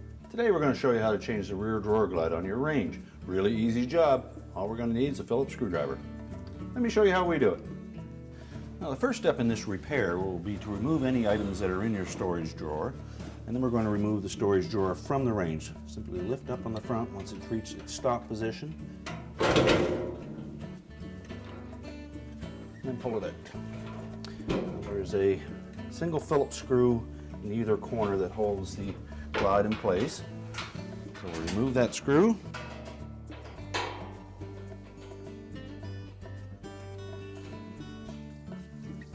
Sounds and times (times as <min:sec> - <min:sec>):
Music: 0:00.0 - 0:39.1
Speech: 0:00.3 - 0:06.0, 0:06.8 - 0:07.7, 0:08.8 - 0:18.8, 0:22.8 - 0:23.6, 0:24.6 - 0:30.3, 0:31.2 - 0:32.5.